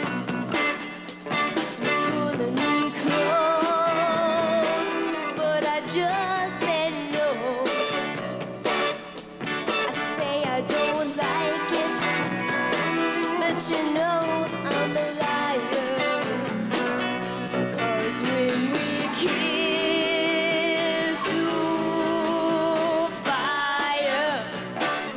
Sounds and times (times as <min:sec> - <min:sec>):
Music: 0:00.0 - 0:25.1.